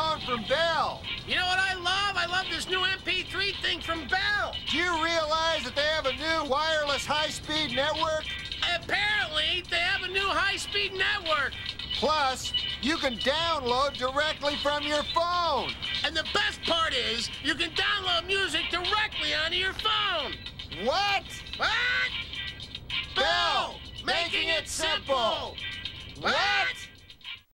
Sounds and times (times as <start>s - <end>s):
Speech: 0.0s - 21.8s
Music: 0.0s - 27.5s.